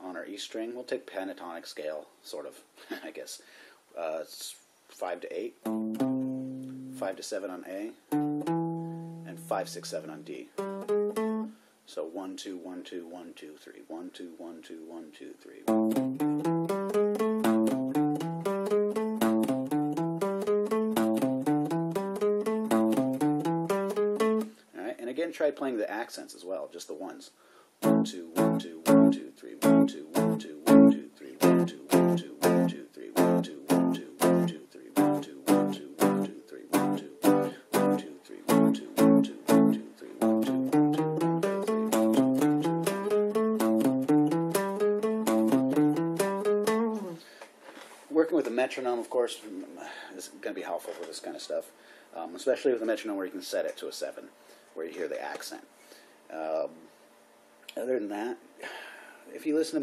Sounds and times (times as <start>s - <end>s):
Speech: 0.0s - 5.7s, 7.0s - 8.0s, 9.3s - 10.6s, 11.9s - 15.7s, 24.7s - 27.4s, 28.0s - 40.3s, 48.1s - 55.7s, 56.3s - 56.9s, 57.7s - 58.5s, 59.3s - 59.8s
Guitar: 5.6s - 7.2s, 8.0s - 11.6s, 15.7s - 24.6s, 27.8s - 47.3s.